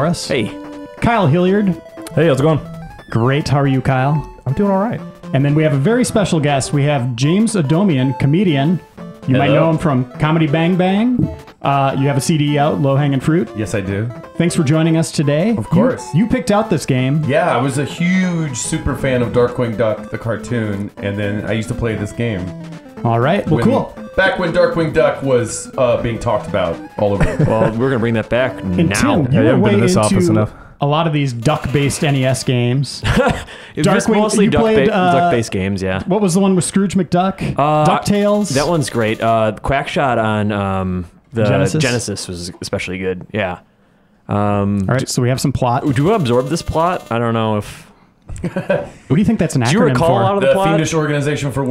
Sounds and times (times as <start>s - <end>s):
Speech: 0.0s - 33.0s, 33.8s - 43.6s, 44.3s - 47.8s, 49.1s - 51.7s
Music: 0.0s - 51.7s.